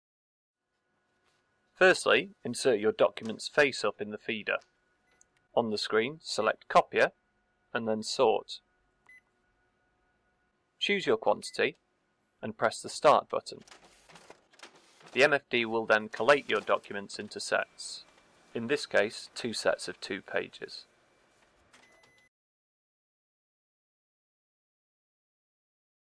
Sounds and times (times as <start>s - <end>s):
Speech: 1.8s - 4.6s, 5.6s - 7.2s, 7.8s - 8.6s, 10.8s - 11.8s, 12.4s - 13.7s, 15.2s - 20.9s.